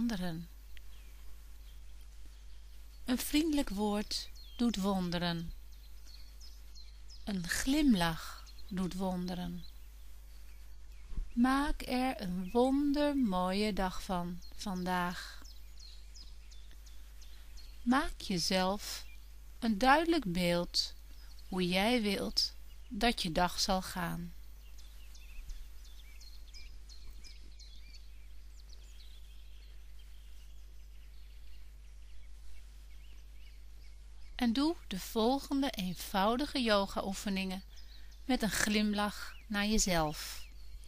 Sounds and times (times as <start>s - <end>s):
Speech: 0.0s - 0.5s, 3.1s - 5.5s, 7.3s - 9.7s, 11.4s - 15.4s, 17.9s - 24.4s, 34.4s - 37.6s, 38.3s - 40.4s.